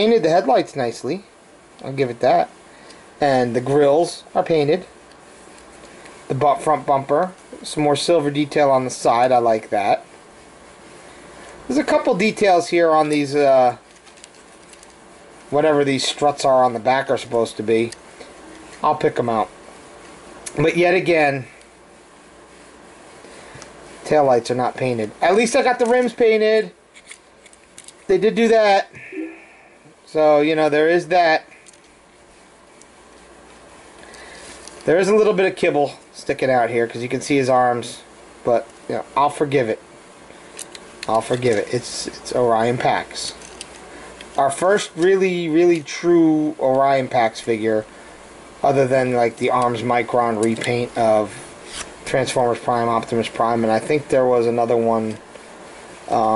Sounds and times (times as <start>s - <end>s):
Speech: 0.0s - 2.6s, 3.2s - 5.0s, 6.3s - 10.1s, 11.7s - 13.8s, 15.5s - 18.0s, 18.8s - 19.6s, 20.5s - 21.6s, 24.0s - 26.8s, 28.1s - 29.4s, 30.1s - 31.6s, 34.9s - 39.8s, 41.1s - 43.4s, 44.4s - 47.9s, 48.6s - 51.4s, 52.0s - 55.2s, 56.1s - 56.3s.